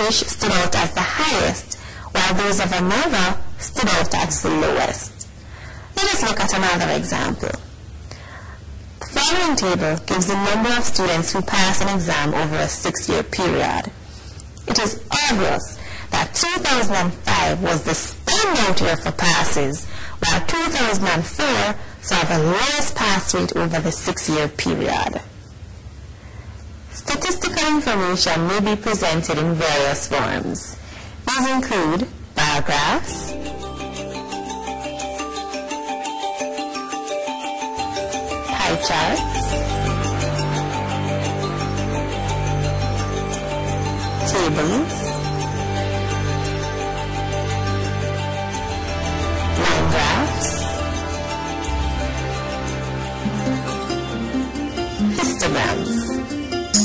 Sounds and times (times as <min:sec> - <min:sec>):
Music: 0:00.0 - 0:01.6, 0:09.0 - 0:12.8, 0:15.0 - 0:23.8, 0:31.6 - 0:56.8
Speech: 0:00.0 - 0:05.2, 0:06.0 - 0:07.6, 0:09.0 - 0:14.0, 0:14.7 - 0:25.3, 0:27.0 - 0:33.4, 0:38.5 - 0:39.6, 0:44.2 - 0:45.1, 0:49.6 - 0:50.7, 0:55.2 - 0:56.2.